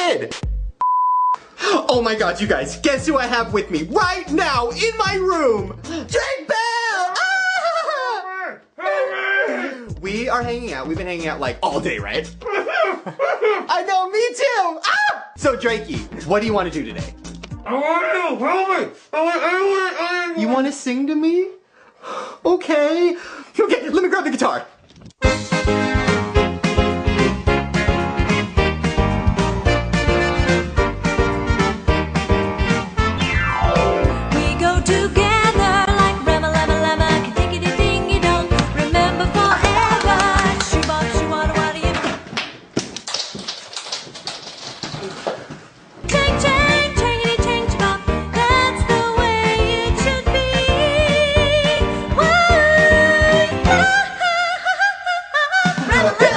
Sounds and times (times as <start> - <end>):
Music: 0.0 - 0.8, 1.6 - 6.4, 9.7 - 12.5, 15.4 - 17.8, 25.2 - 42.2, 46.0 - 54.4, 55.7 - 56.3
Speech: 1.8 - 7.3, 8.1 - 12.3, 13.7 - 17.1, 17.7 - 21.6, 22.4 - 24.7.